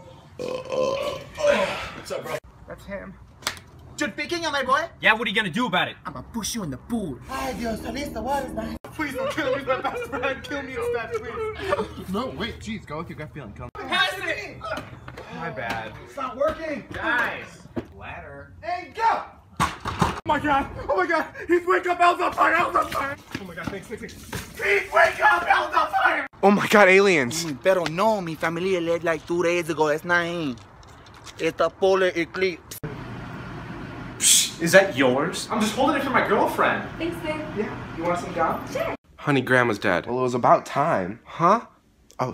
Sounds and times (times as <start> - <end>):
Outside, urban or manmade: 0.0 - 42.3.